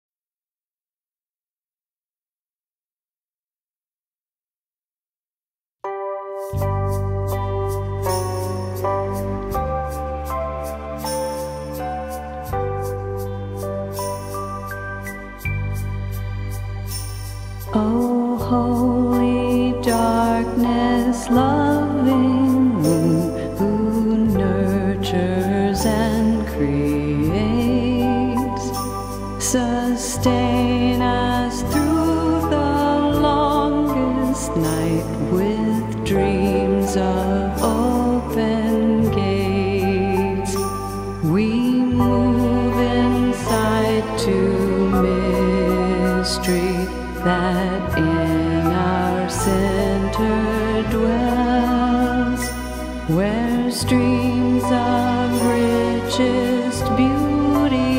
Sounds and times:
Tender music: 5.8s - 57.9s.

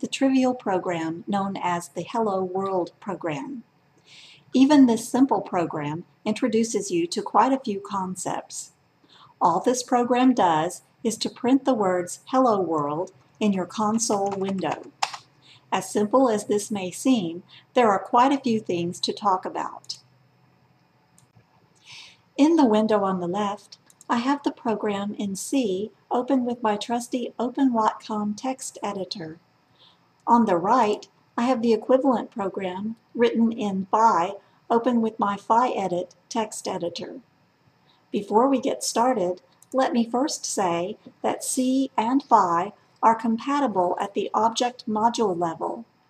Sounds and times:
Speech: 0.0s - 3.6s, 4.6s - 8.7s, 9.4s - 20.0s, 21.9s - 29.4s, 30.3s - 37.2s, 38.2s - 45.8s.

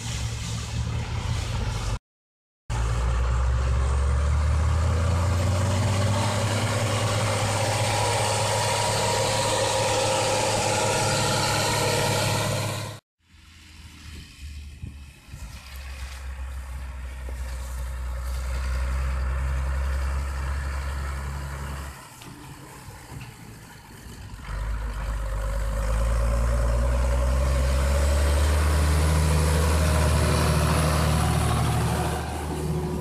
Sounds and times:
Vehicle: 0.0s - 2.0s, 2.7s - 33.0s
Accelerating, revving, vroom: 2.8s - 13.0s, 17.0s - 22.1s, 24.4s - 33.0s.

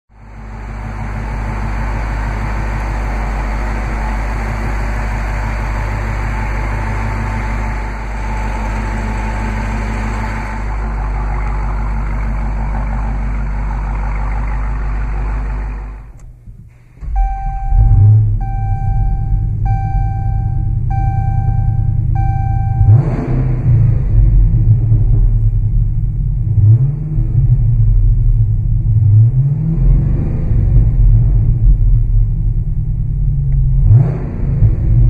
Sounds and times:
Car: 0.1s - 35.0s.

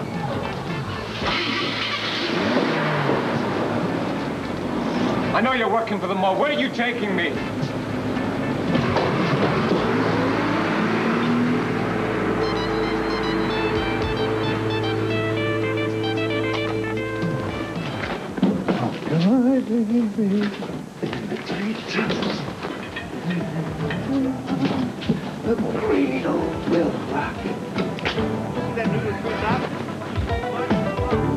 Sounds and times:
Music: 0.0s - 2.3s, 11.8s - 19.5s, 22.6s - 31.3s.

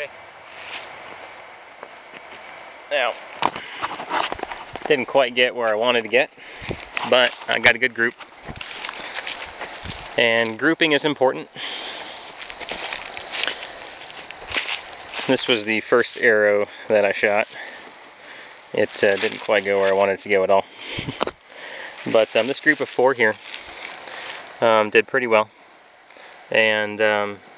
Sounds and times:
Speech: 2.9s - 3.2s, 4.9s - 6.3s, 7.0s - 8.2s, 10.2s - 11.5s, 15.2s - 17.7s, 18.8s - 20.7s, 22.0s - 23.4s, 24.6s - 25.5s, 26.5s - 27.4s.

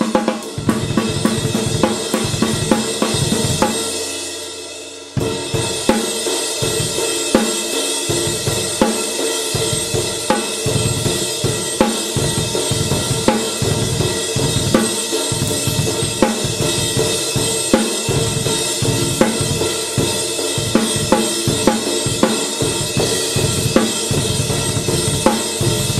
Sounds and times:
Drum: 0.0s - 26.0s.

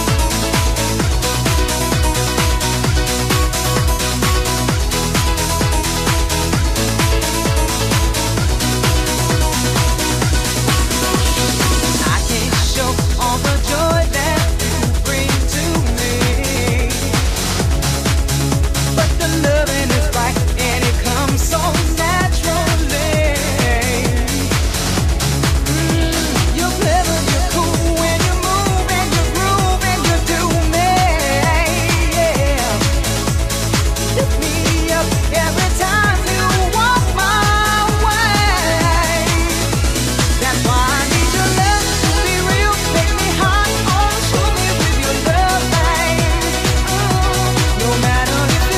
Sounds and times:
Music: 0.0s - 48.7s.

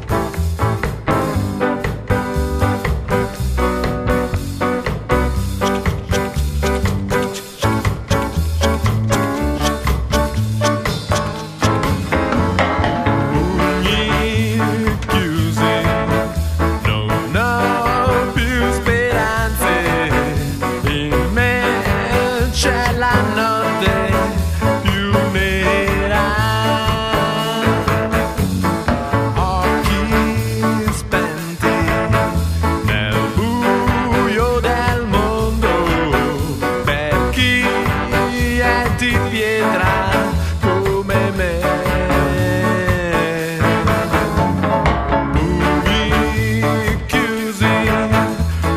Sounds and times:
Music: 0.0s - 48.7s.

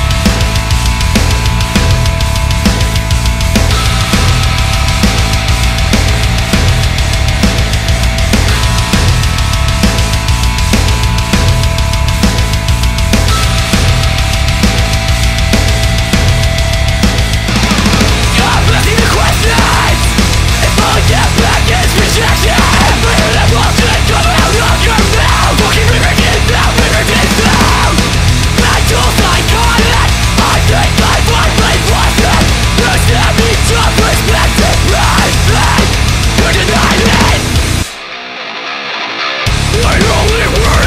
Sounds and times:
Music: 0.0s - 40.8s.

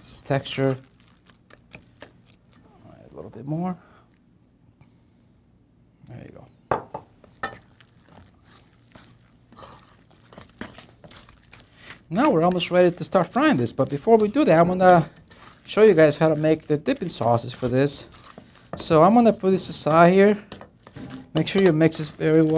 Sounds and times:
Speech: 6.0s - 6.5s, 12.1s - 15.1s, 15.7s - 18.1s, 18.8s - 20.4s, 21.4s - 22.5s.

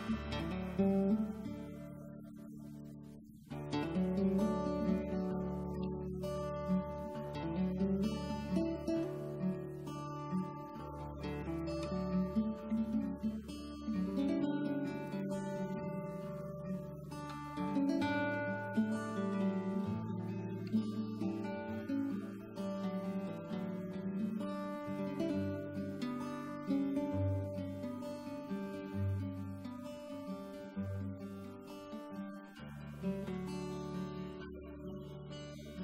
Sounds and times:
Acoustic guitar: 0.0s - 35.8s.

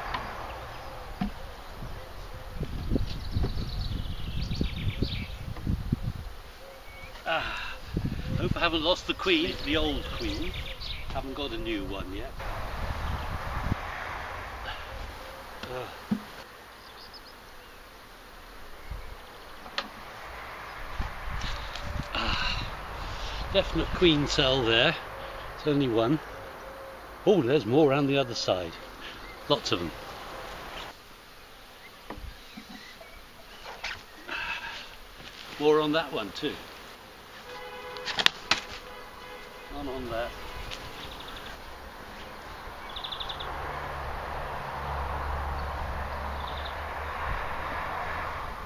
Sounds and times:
Outside, rural or natural: 0.0s - 48.6s
Speech: 8.4s - 12.4s, 35.6s - 36.6s, 39.7s - 40.4s.

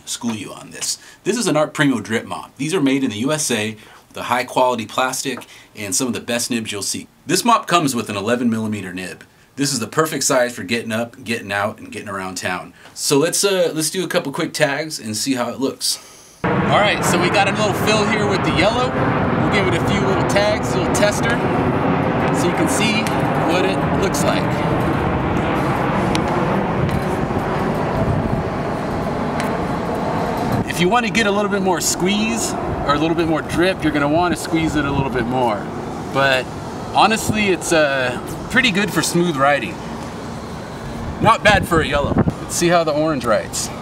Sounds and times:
Speech: 0.0s - 16.0s, 16.7s - 21.4s, 22.3s - 24.8s, 30.6s - 39.8s, 41.2s - 43.8s.

